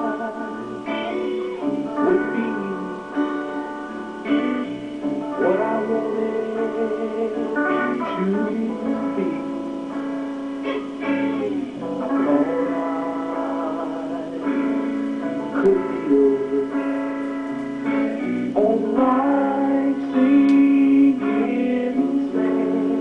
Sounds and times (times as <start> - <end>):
Music: 0.0 - 23.0.